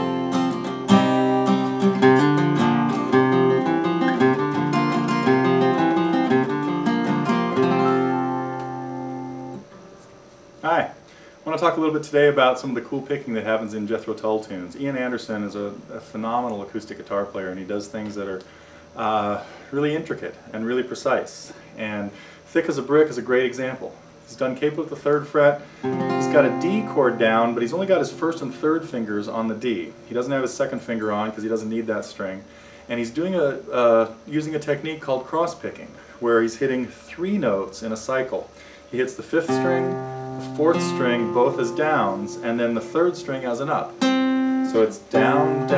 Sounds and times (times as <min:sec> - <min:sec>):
Speech: 0:10.6 - 0:25.6, 0:26.2 - 0:44.0, 0:44.7 - 0:45.7.